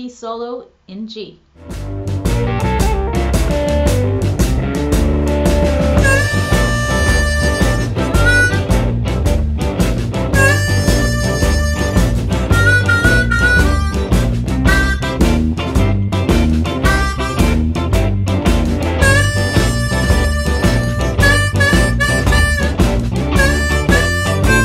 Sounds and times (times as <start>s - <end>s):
Guitar: 1.6s - 24.6s
Harmonica: 6.0s - 9.4s, 10.3s - 15.6s, 16.8s - 17.8s, 19.0s - 24.6s.